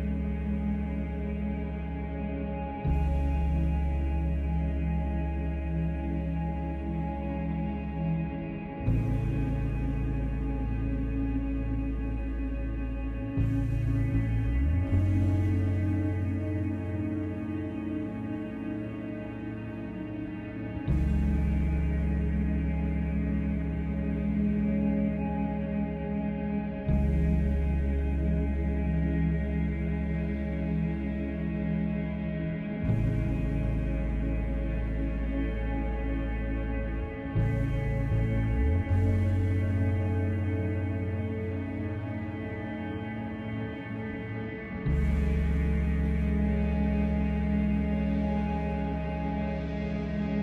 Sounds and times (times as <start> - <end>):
Music: 0.0 - 50.4.